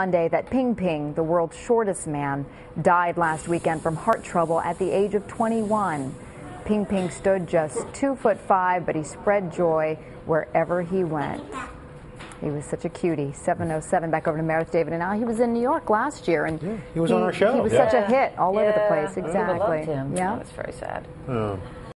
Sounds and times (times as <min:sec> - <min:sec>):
Speech: 0:12.4 - 0:21.6.